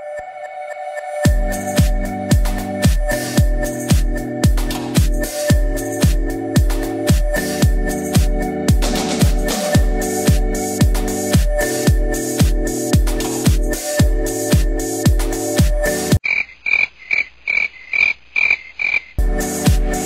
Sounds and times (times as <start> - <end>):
Music: 0.0 - 16.2, 19.2 - 20.0.